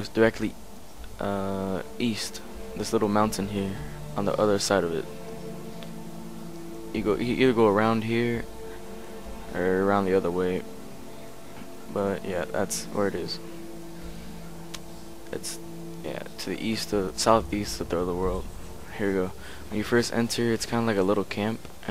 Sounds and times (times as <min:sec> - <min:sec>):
Speech: 0:00.0 - 0:00.6, 0:01.2 - 0:05.1, 0:07.0 - 0:08.5, 0:09.5 - 0:10.7, 0:11.9 - 0:13.4, 0:15.3 - 0:21.9
Music: 0:00.0 - 0:21.9.